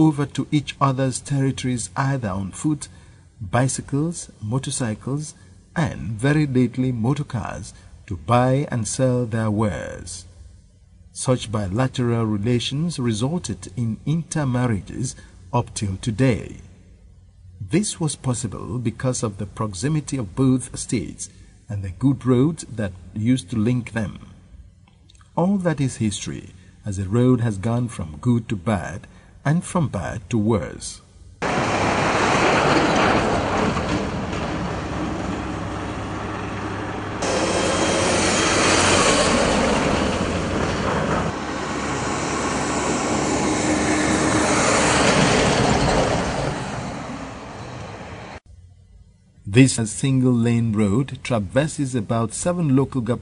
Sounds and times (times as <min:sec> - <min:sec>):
Outside, rural or natural: 0:31.4 - 0:48.7.